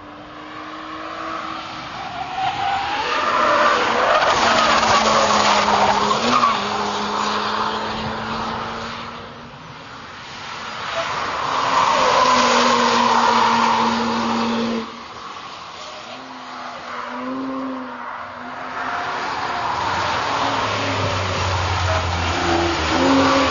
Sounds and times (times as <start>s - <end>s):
Car passing by: 0.0s - 9.4s, 10.1s - 23.5s.